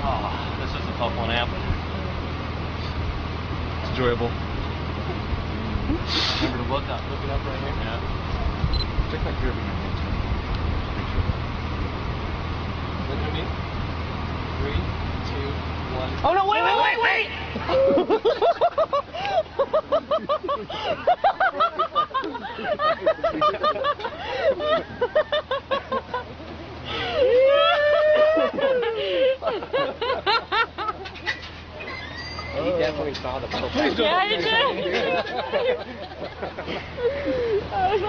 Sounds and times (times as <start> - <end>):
Outside, rural or natural: 0.0 - 38.0.